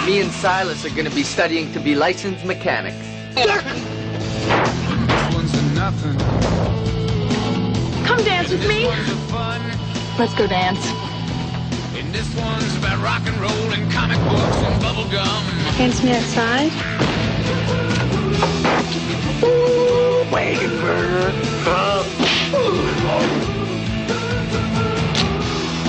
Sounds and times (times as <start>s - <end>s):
Music: 0.0s - 25.8s.